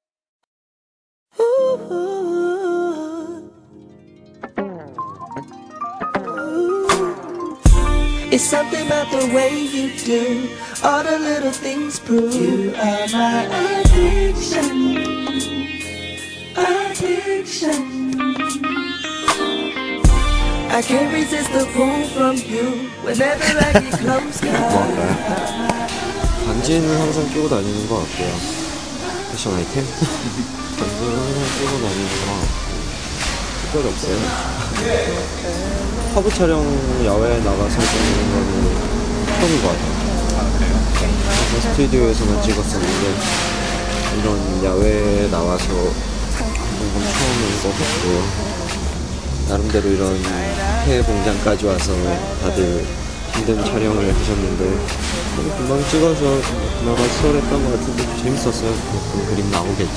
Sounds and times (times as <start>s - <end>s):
Music: 1.4s - 59.9s
Speech: 26.5s - 28.6s, 29.3s - 32.6s, 33.7s - 43.4s, 44.2s - 48.7s, 49.5s - 59.9s.